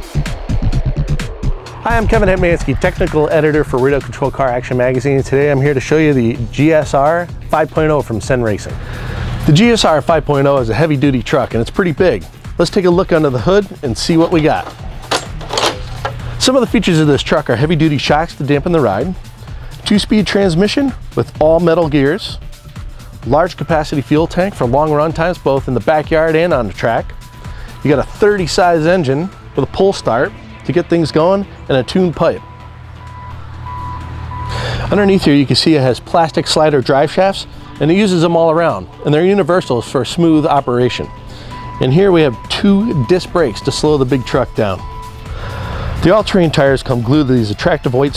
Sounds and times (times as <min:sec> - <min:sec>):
Music: 0:00.0 - 0:48.1
Speech: 0:01.8 - 0:08.8, 0:09.5 - 0:14.8, 0:16.4 - 0:19.2, 0:19.8 - 0:22.4, 0:23.2 - 0:27.1, 0:27.8 - 0:32.4, 0:34.9 - 0:41.1, 0:41.8 - 0:44.8, 0:46.0 - 0:48.1.